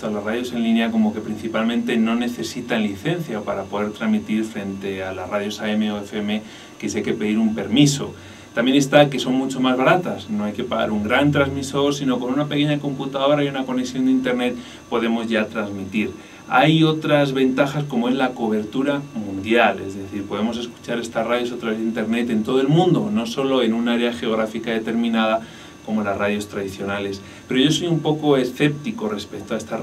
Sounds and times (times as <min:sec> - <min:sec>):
Speech: 0:00.0 - 0:29.8.